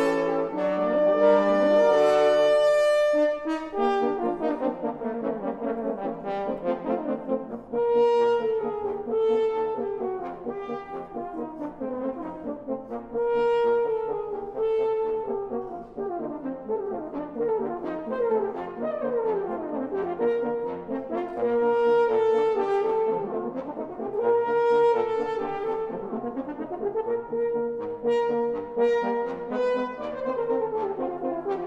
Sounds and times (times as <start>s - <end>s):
French horn: 0.0s - 31.6s.